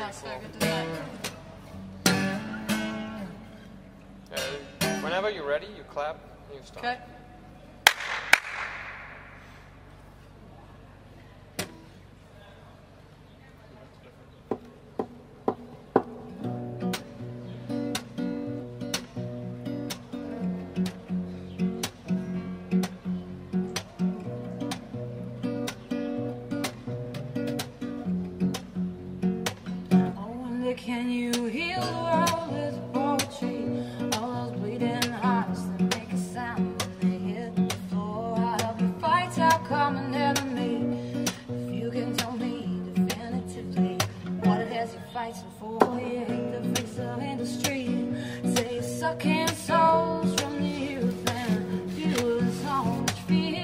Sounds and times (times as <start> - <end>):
Music: 0.0 - 5.2, 15.5 - 53.6.